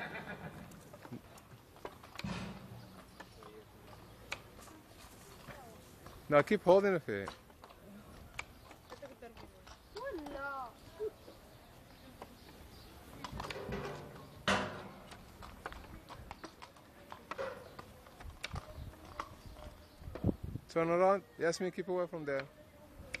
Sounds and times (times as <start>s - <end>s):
Clip-clop: 0.0s - 20.4s.